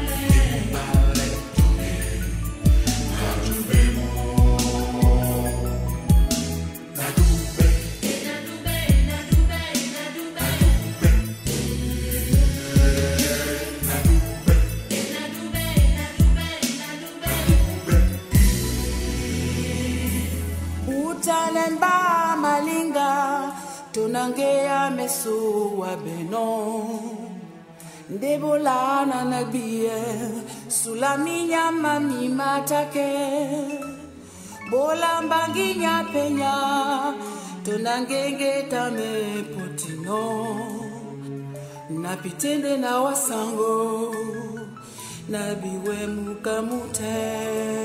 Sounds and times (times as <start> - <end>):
Music: 0.0 - 47.8.